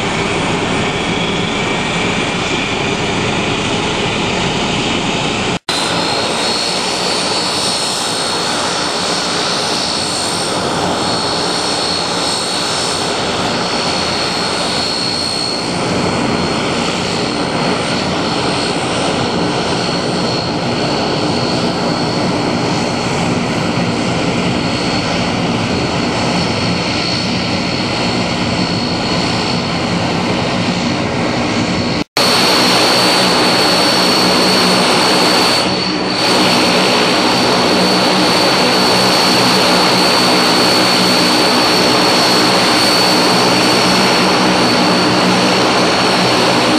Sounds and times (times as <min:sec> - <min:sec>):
Aircraft: 0:00.0 - 0:46.7
Heavy engine (low frequency): 0:00.0 - 0:46.7.